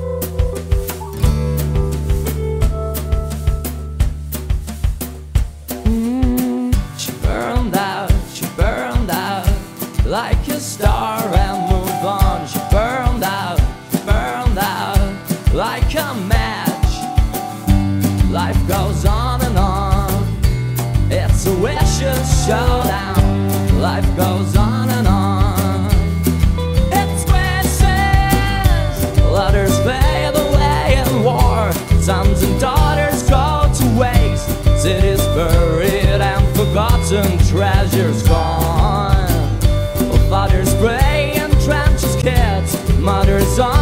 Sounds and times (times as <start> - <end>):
Rhythm and blues: 0.0 - 43.8.